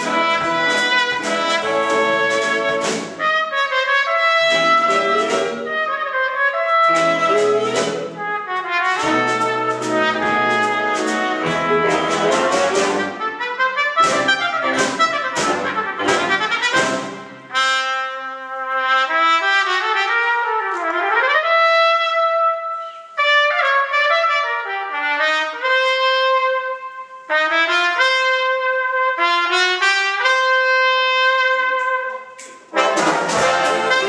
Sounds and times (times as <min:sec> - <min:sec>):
Inside, large room or hall: 0:00.0 - 0:34.0
Orchestra: 0:00.0 - 0:34.0
Trumpet: 0:00.0 - 0:34.0.